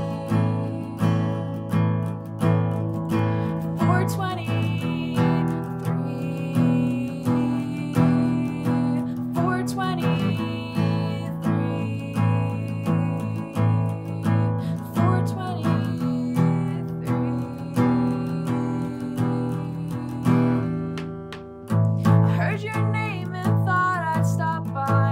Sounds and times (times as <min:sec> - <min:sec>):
Music: 0:00.0 - 0:25.1.